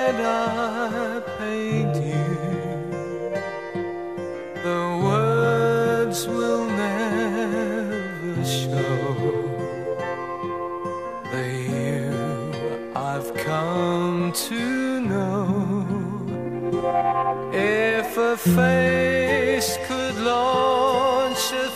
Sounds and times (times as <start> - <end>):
Male singing: 0.0 - 3.3, 4.6 - 10.0, 11.3 - 16.4, 17.5 - 21.7
Music: 0.0 - 21.7.